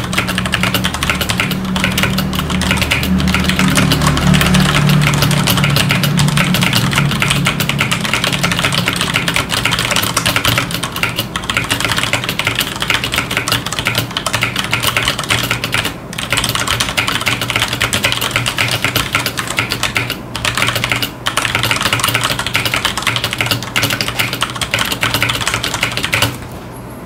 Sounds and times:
Computer keyboard: 0.0s - 26.5s.

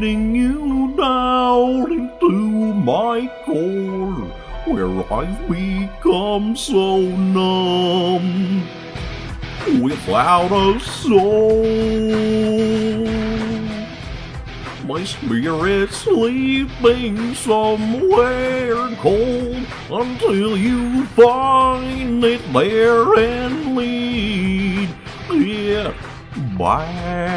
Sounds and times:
Music: 0.0s - 27.3s.

